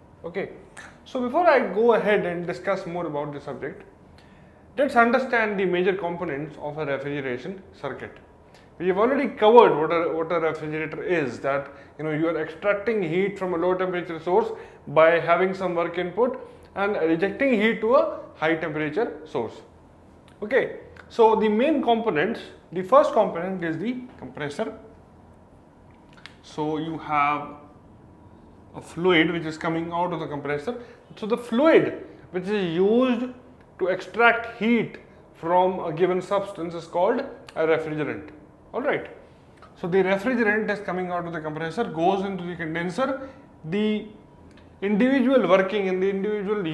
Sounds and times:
Speech: 0:00.2 - 0:03.9, 0:04.8 - 0:19.7, 0:20.4 - 0:24.9, 0:26.4 - 0:27.6, 0:28.8 - 0:39.2, 0:39.8 - 0:44.2, 0:44.8 - 0:46.7.

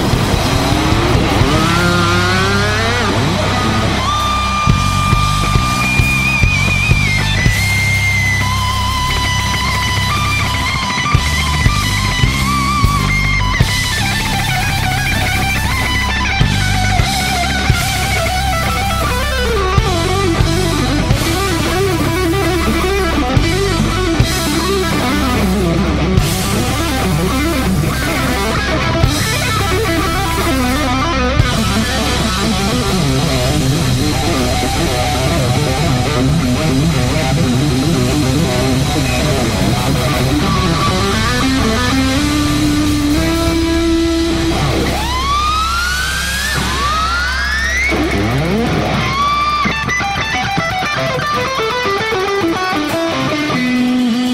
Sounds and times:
Heavy metal: 0:00.0 - 0:54.3.

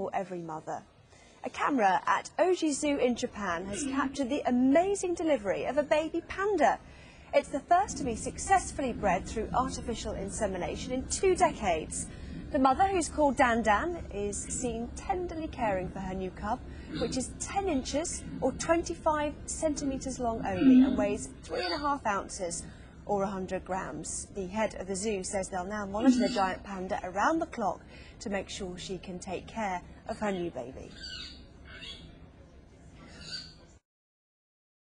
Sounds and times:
Speech: 0:01.4 - 0:06.8, 0:07.4 - 0:30.9.

